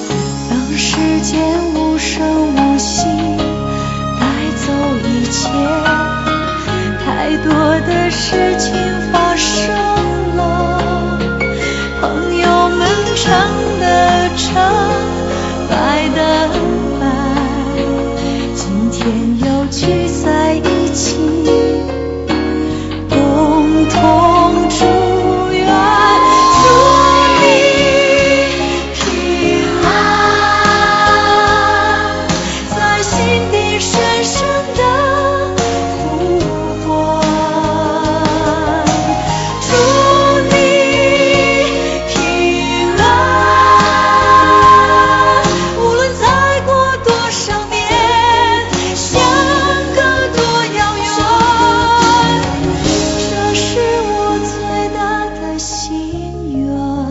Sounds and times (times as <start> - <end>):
Music: 0.0 - 57.1
Singing: 23.2 - 39.0, 39.6 - 57.0.